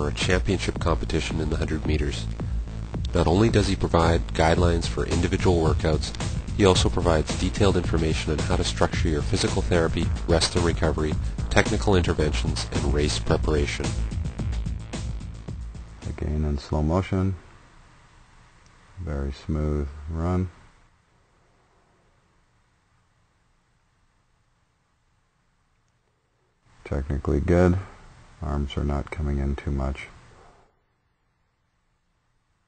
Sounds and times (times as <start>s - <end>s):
Speech: 0.0s - 2.3s, 3.1s - 13.9s, 16.0s - 17.4s, 19.0s - 20.6s, 26.8s - 30.2s
Music: 0.0s - 17.0s.